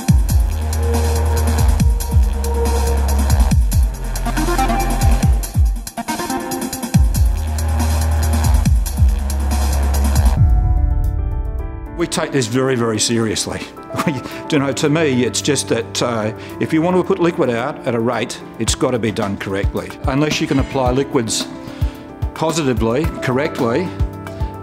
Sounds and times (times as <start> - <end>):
Music: 0.0 - 24.6
Speech: 12.0 - 21.5, 22.4 - 24.0.